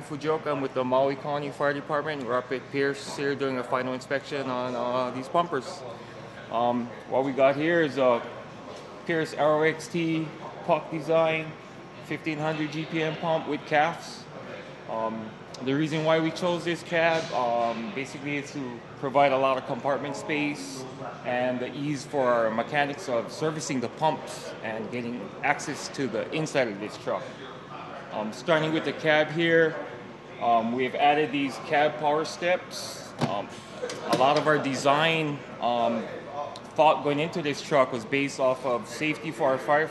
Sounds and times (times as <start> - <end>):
Speech: 0.0 - 39.9.